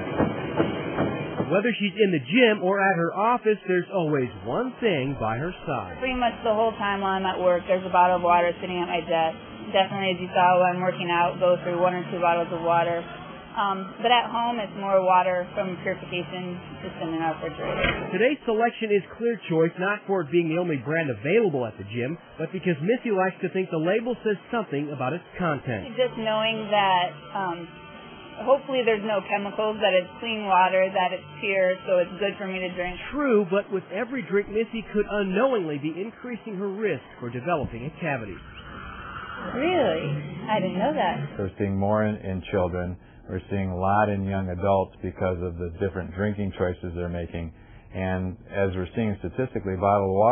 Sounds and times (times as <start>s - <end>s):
Speech: 1.5s - 13.0s, 13.6s - 27.7s, 28.4s - 38.4s, 39.6s - 50.3s.